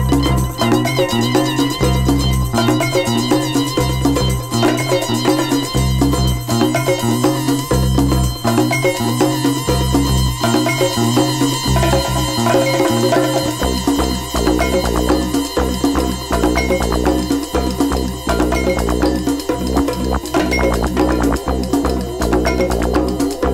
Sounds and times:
Salsa music: 0.0 - 23.5.

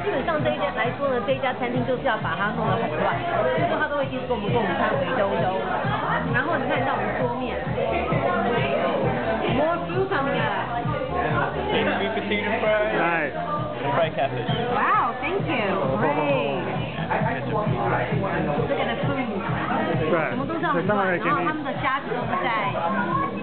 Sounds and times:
Music: 0.0 - 23.4.

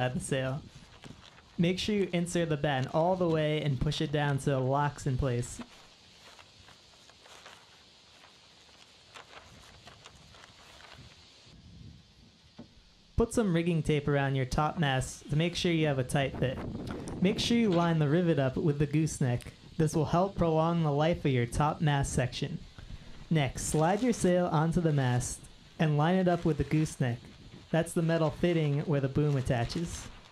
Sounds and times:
Speech: 0.0 - 0.6, 1.6 - 5.7, 13.2 - 16.6, 17.2 - 22.6, 23.3 - 30.1.

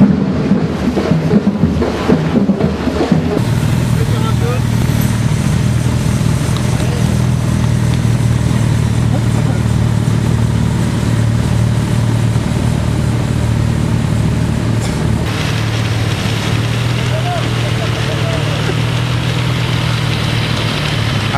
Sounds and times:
Outside, urban or manmade: 0.0 - 21.3
Speech: 4.0 - 4.7, 9.1 - 9.8, 17.0 - 18.8.

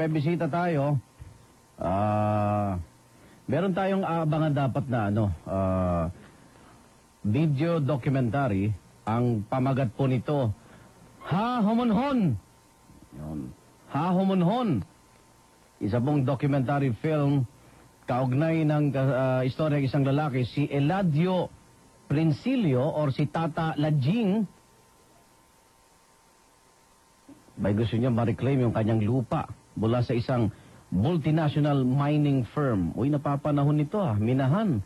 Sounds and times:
Speech: 0.0 - 1.1, 1.8 - 2.9, 3.5 - 6.2, 7.2 - 10.6, 11.2 - 12.4, 13.1 - 14.9, 15.8 - 17.5, 18.1 - 24.6, 27.6 - 34.8.

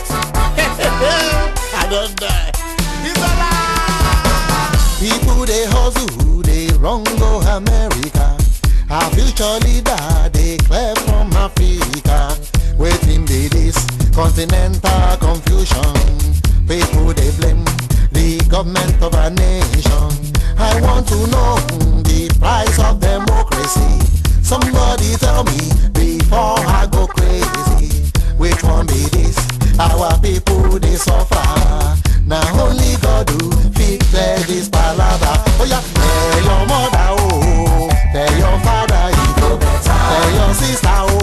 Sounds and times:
Afrobeat: 0.0 - 41.2.

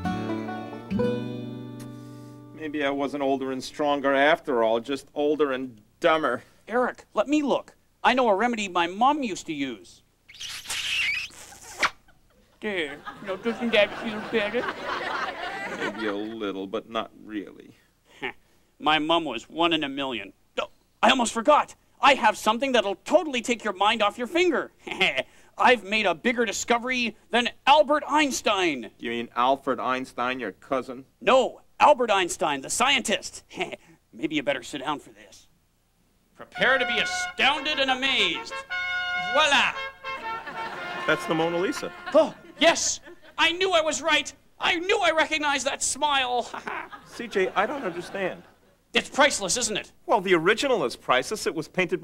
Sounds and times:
Speech: 2.6 - 10.0, 12.6 - 14.8, 15.7 - 17.8, 18.8 - 35.5, 36.4 - 38.6, 39.4 - 39.8, 41.1 - 52.0.

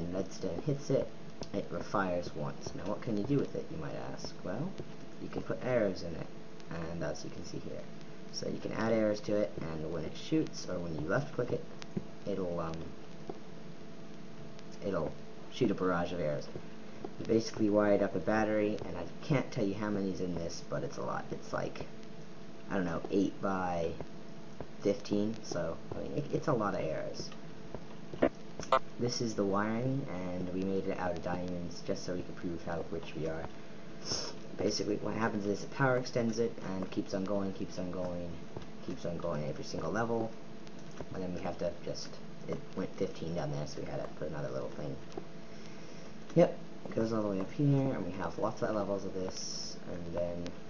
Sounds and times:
Speech: 0.0 - 11.7, 12.3 - 12.9, 14.8 - 16.6, 17.2 - 21.9, 22.7 - 24.0, 24.8 - 27.4, 28.7 - 40.4, 41.1 - 45.1, 46.3 - 50.6.

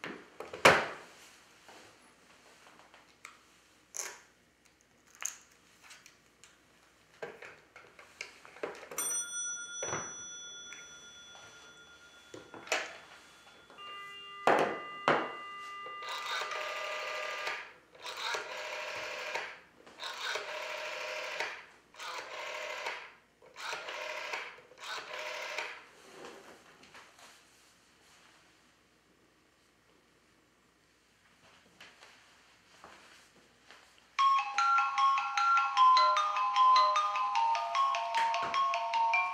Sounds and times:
Telephone bell ringing: 9.0 - 23.0, 23.6 - 25.8, 34.2 - 39.3
Dial tone: 11.4 - 19.4.

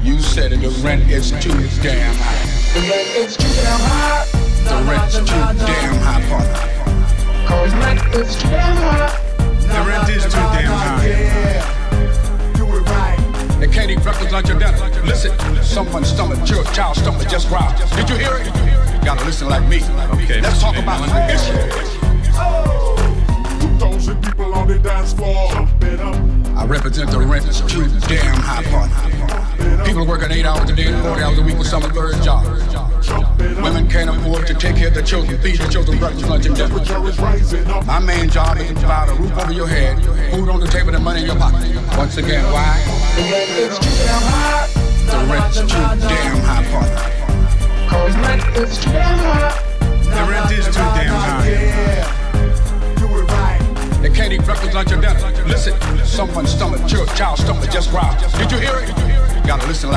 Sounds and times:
Music: 0.0 - 59.9.

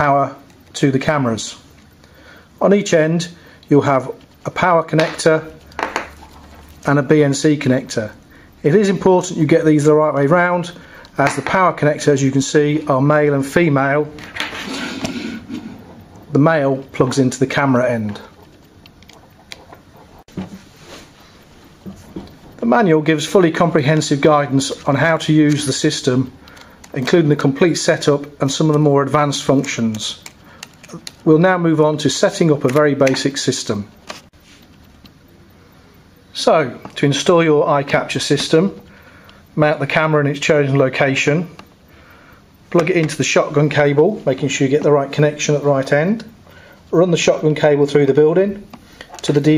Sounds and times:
Speech: 0.0 - 1.7, 2.6 - 5.6, 6.8 - 14.2, 16.3 - 18.4, 22.6 - 30.3, 30.9 - 34.0, 36.3 - 38.9, 39.6 - 41.6, 42.7 - 49.5
Inside, small room: 0.0 - 49.5.

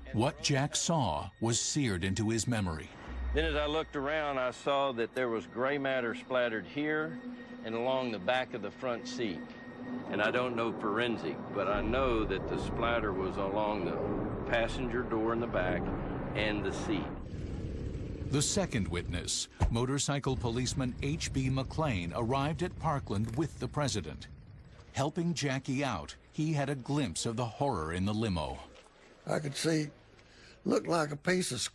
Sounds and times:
Speech: 0.0 - 9.4, 10.1 - 17.1, 18.3 - 24.3, 25.0 - 28.7, 29.3 - 30.0, 30.6 - 31.7.

